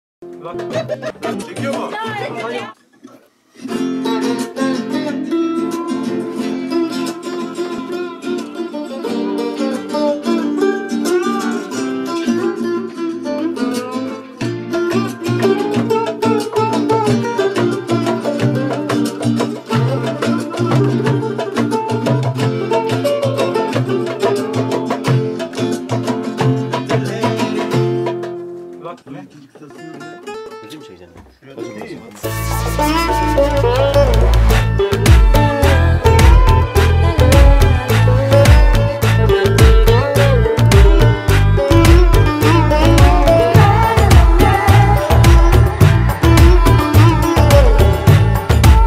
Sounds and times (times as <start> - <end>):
Speech: 0.4 - 3.2, 28.8 - 32.2
Electric guitar: 3.6 - 28.8, 32.2 - 48.8.